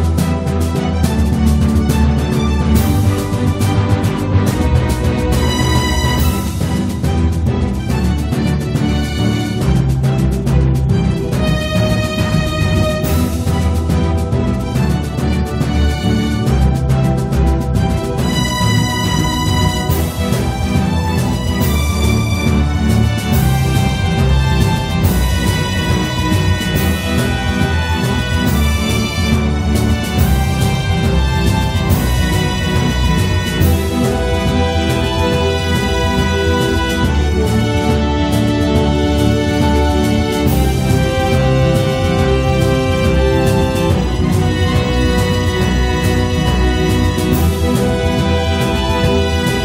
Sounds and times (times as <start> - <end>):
Soundtrack music: 0.0 - 49.6.